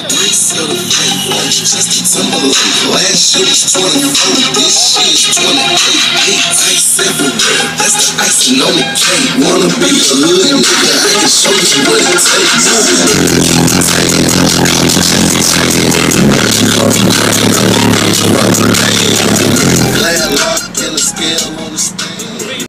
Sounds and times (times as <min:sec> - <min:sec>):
Music: 0:00.0 - 0:22.6.